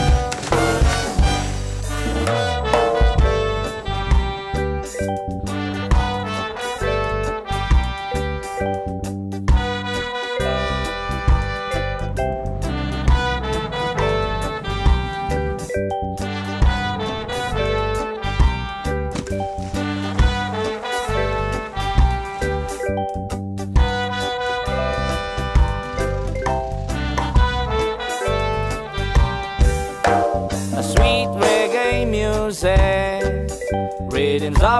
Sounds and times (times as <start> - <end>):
Theme music: 0.0 - 33.9.